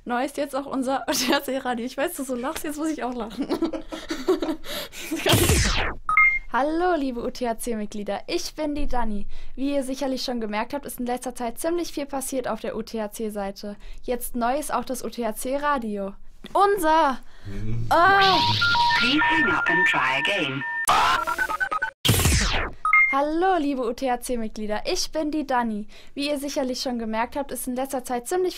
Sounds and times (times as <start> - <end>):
Speech: 0.1 - 3.4, 6.6 - 21.2, 23.2 - 28.5.